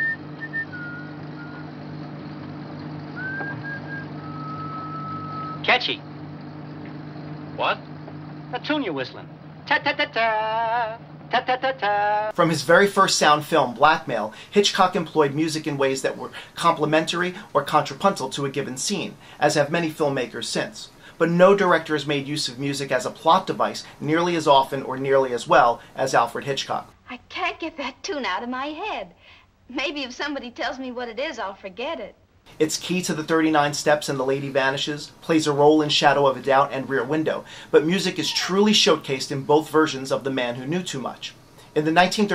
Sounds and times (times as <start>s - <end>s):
Speech: 5.6s - 6.0s, 7.6s - 7.8s, 8.6s - 9.3s, 12.4s - 29.1s, 29.7s - 42.3s.